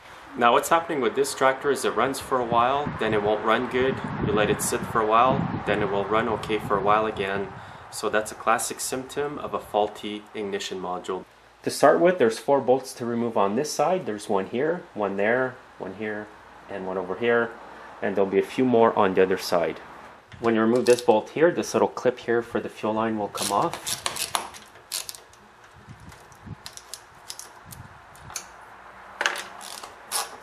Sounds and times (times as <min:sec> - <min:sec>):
Speech: 0:00.4 - 0:19.8, 0:20.4 - 0:23.8.